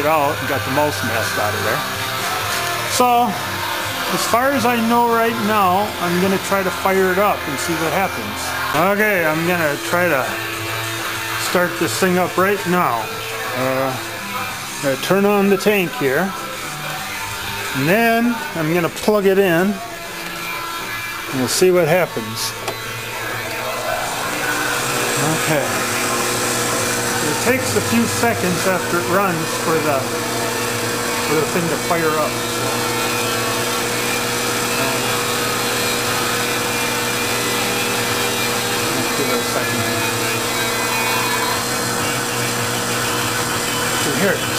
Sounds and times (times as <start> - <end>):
Power tool: 0.0 - 44.5.